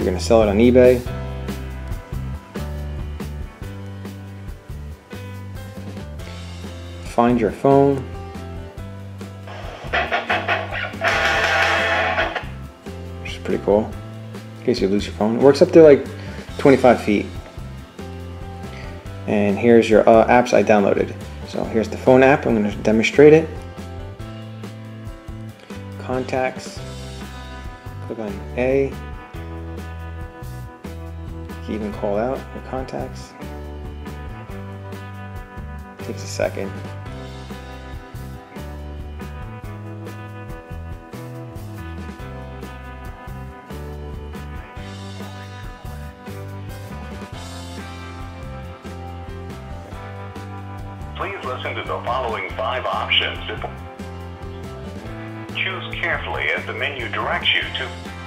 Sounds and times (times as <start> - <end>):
Speech: 0.0 - 1.1, 7.1 - 8.1, 13.2 - 14.0, 14.6 - 17.4, 19.3 - 23.6, 26.0 - 26.8, 28.0 - 29.0, 31.7 - 33.4, 36.0 - 36.8, 51.2 - 53.8, 55.6 - 58.0
Music: 0.0 - 58.2
Inside, small room: 5.8 - 24.2.